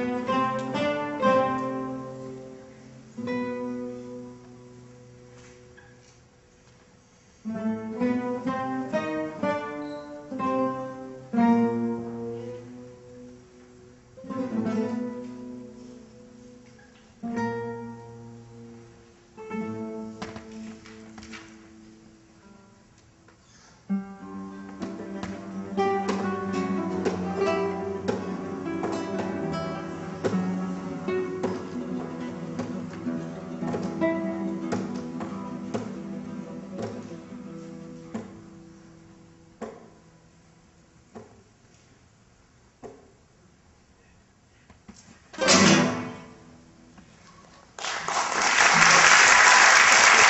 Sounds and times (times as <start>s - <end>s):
Orchestra: 0.0s - 6.3s, 7.1s - 22.6s, 23.9s - 39.3s, 45.4s - 46.7s
Classical music: 0.0s - 23.0s, 23.9s - 40.4s, 45.4s - 46.8s
Guitar: 0.0s - 43.3s, 44.9s - 50.3s.